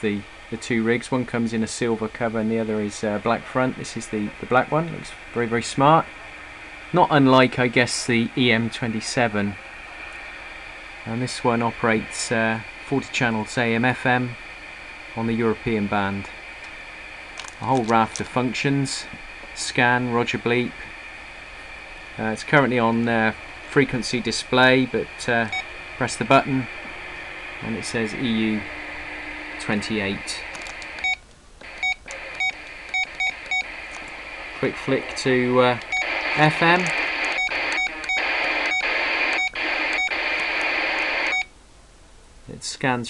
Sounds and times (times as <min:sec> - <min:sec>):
Speech: 0:00.0 - 0:06.1, 0:06.9 - 0:09.6, 0:11.1 - 0:14.4, 0:15.2 - 0:16.3, 0:17.6 - 0:20.8, 0:22.2 - 0:26.7, 0:27.6 - 0:28.7, 0:29.6 - 0:30.5, 0:34.6 - 0:37.0, 0:42.5 - 0:43.0.